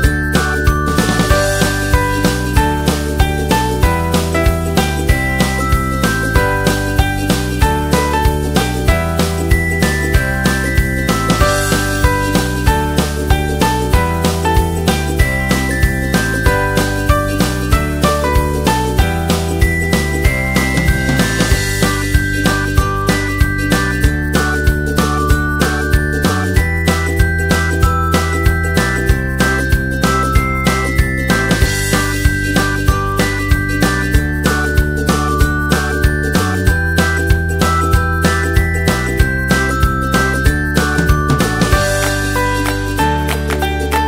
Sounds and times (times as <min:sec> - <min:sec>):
Music: 0:00.0 - 0:44.0.